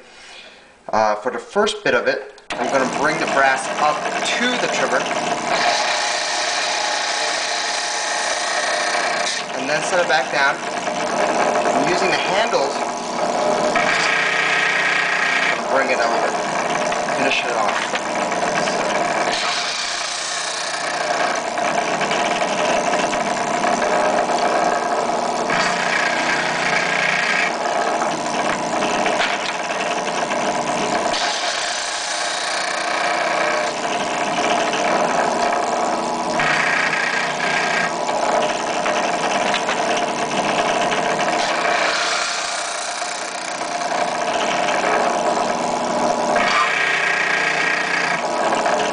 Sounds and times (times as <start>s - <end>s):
Speech: 0.9s - 5.1s, 9.6s - 10.6s, 11.8s - 12.8s, 15.7s - 16.4s, 17.2s - 17.8s
Drill: 2.5s - 48.9s.